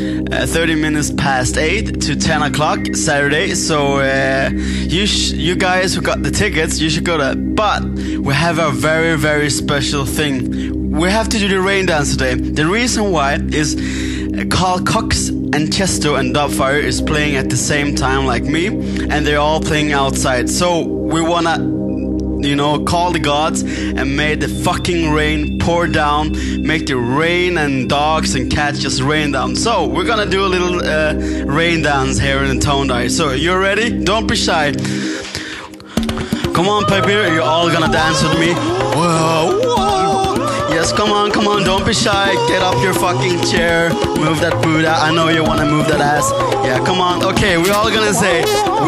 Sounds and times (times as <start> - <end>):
Speech: 0.0 - 21.7, 22.4 - 34.9, 36.6 - 48.8
Music: 0.0 - 48.8.